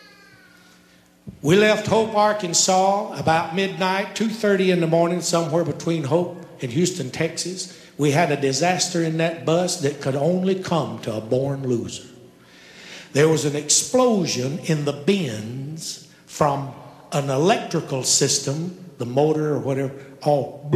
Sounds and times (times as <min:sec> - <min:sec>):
Speech: 0:01.4 - 0:12.1, 0:13.1 - 0:20.7.